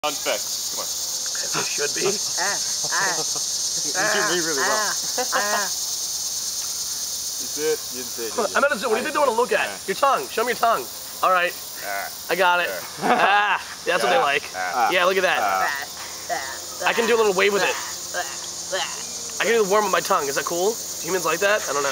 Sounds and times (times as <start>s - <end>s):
Cricket: 0.0s - 21.9s.